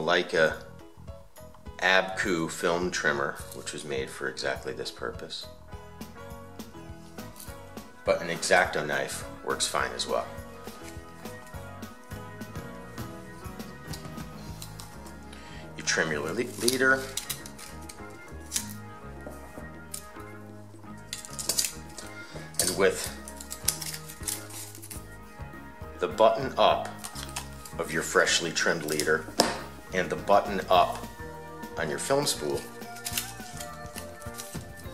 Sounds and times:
Speech: 0.0s - 0.7s, 1.8s - 5.5s, 8.1s - 10.3s, 15.8s - 17.2s, 22.6s - 23.2s, 26.0s - 27.0s, 27.8s - 29.3s, 29.9s - 31.0s, 31.8s - 32.7s
Music: 0.0s - 34.9s.

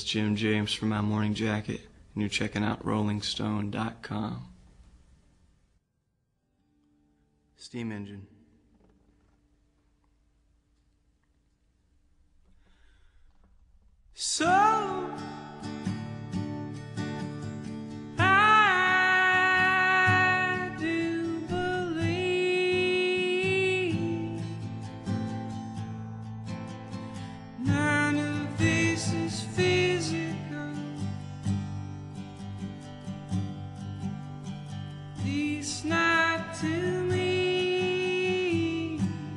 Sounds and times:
Music: 6.5s - 7.6s, 14.4s - 39.3s.

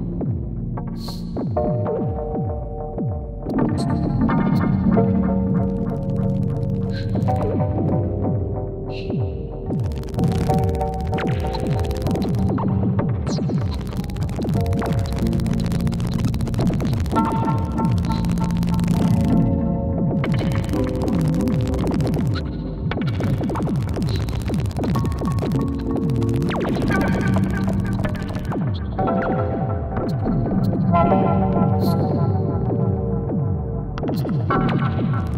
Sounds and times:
Synthesizer: 0.0s - 35.3s.

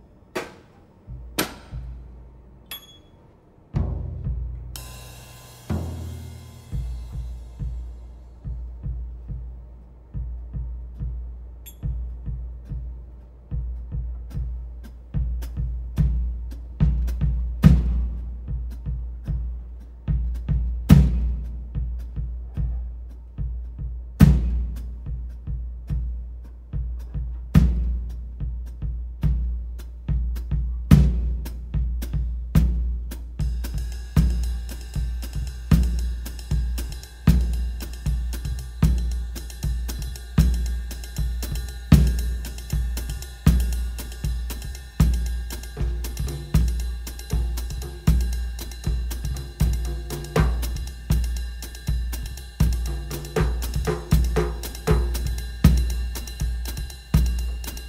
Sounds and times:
Music: 3.7s - 57.8s.

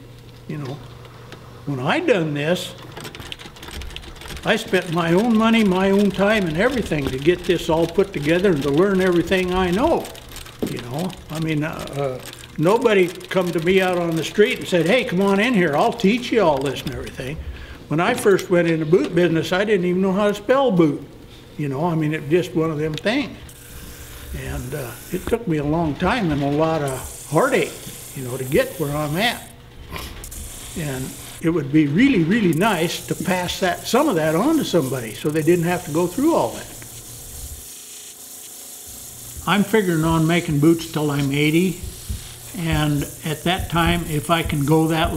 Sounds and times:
Speech: 0.5s - 0.8s, 1.7s - 2.8s, 4.4s - 23.4s, 24.4s - 29.5s, 30.8s - 36.7s, 39.4s - 41.8s, 42.6s - 45.1s.

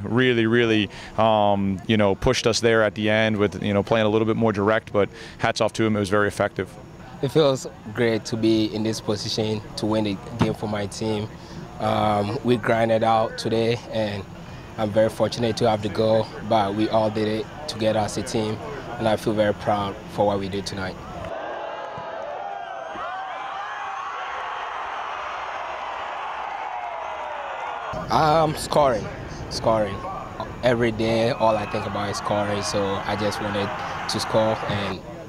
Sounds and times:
Speech: 0.0s - 21.0s, 28.0s - 35.2s.

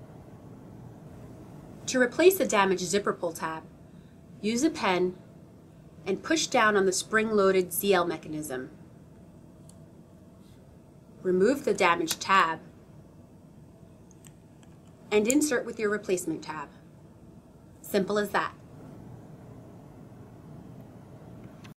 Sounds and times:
Speech: 1.9s - 3.7s, 4.4s - 5.2s, 6.1s - 8.7s, 11.2s - 12.7s, 15.1s - 16.8s, 17.8s - 18.6s.

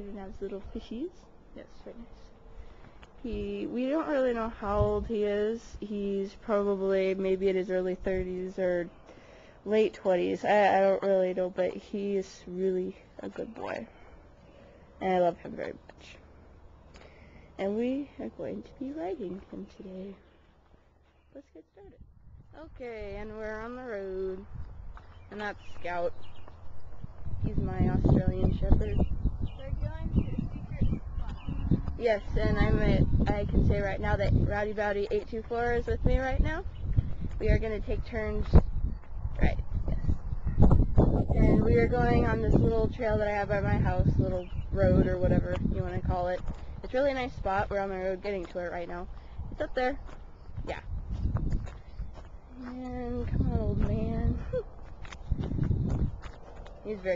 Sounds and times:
Speech: 0.0s - 2.2s, 3.2s - 8.9s, 9.7s - 13.9s, 15.0s - 16.2s, 17.6s - 20.2s, 21.4s - 22.0s, 22.6s - 24.5s, 25.3s - 26.2s, 27.4s - 36.7s, 37.4s - 38.6s, 39.4s - 40.0s, 41.3s - 50.0s, 50.6s - 50.9s, 52.6s - 54.6s, 56.9s - 57.1s.

